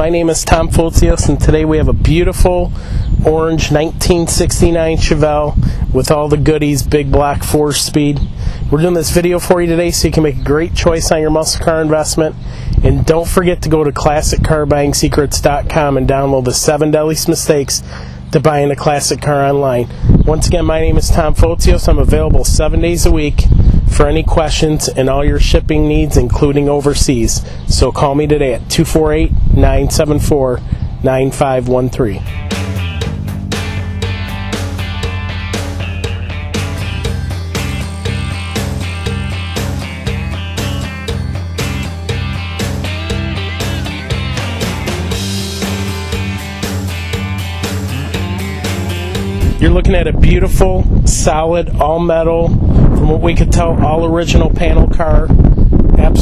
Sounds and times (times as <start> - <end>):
Speech: 0.0 - 32.3, 49.6 - 55.4, 56.0 - 56.2.